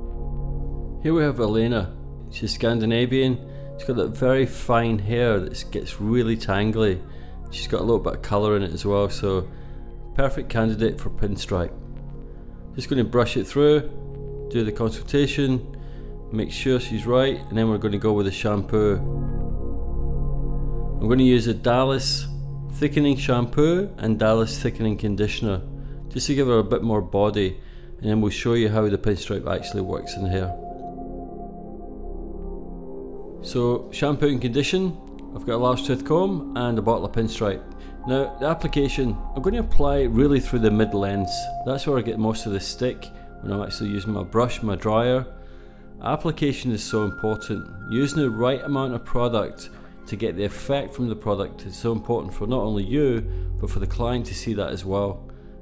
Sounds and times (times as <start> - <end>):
Music: 0.0 - 55.6
Speech: 1.0 - 9.5, 10.2 - 11.8, 12.8 - 15.7, 16.3 - 19.0, 21.0 - 30.6, 33.4 - 45.3, 46.0 - 55.2.